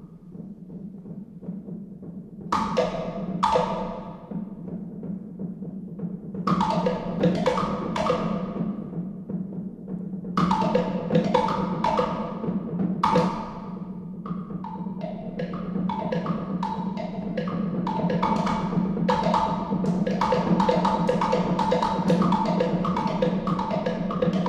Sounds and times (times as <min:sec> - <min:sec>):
Percussion: 0:00.0 - 0:24.4.